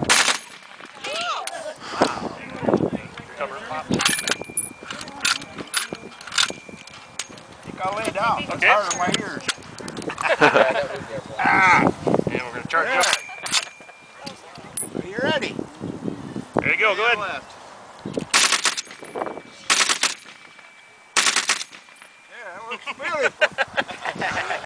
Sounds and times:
Machine gun: 0.1s - 0.6s, 18.3s - 18.9s, 19.7s - 20.4s, 21.2s - 21.8s.

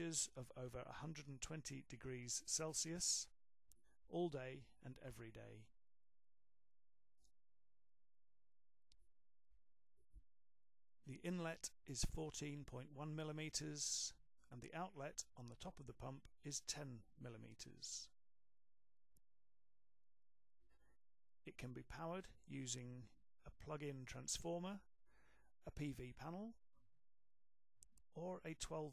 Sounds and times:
Speech: 0.0s - 3.4s, 4.1s - 5.7s, 11.1s - 18.2s, 21.5s - 24.9s, 25.6s - 26.6s, 28.2s - 28.9s.

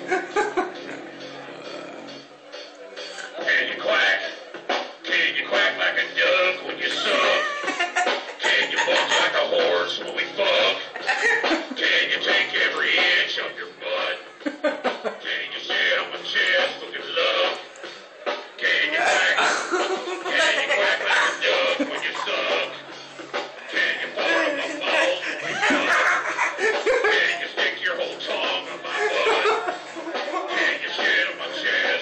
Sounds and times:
Snicker: 0.0s - 0.9s, 6.9s - 9.6s, 10.7s - 11.8s, 14.4s - 15.3s, 19.3s - 22.8s, 24.1s - 27.6s, 28.4s - 30.8s
Chuckle, chortle: 0.0s - 1.0s, 6.9s - 9.4s, 11.0s - 11.8s, 14.4s - 15.2s, 19.4s - 22.6s, 24.4s - 27.4s, 28.7s - 30.6s
Music: 0.0s - 32.0s.

